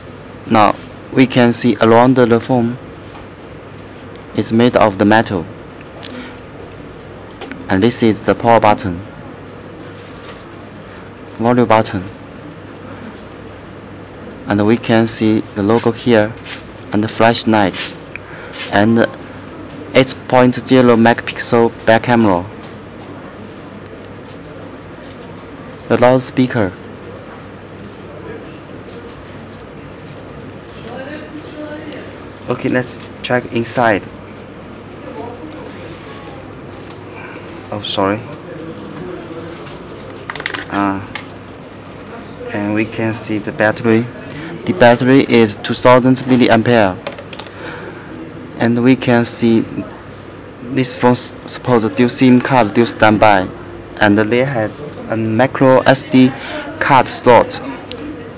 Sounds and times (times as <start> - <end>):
Speech: 0.4 - 2.8, 4.4 - 5.5, 7.7 - 9.1, 11.4 - 12.2, 14.5 - 17.9, 18.7 - 19.2, 19.9 - 22.6, 25.8 - 26.8, 30.8 - 34.1, 37.7 - 39.8, 42.1 - 47.0, 48.6 - 58.3.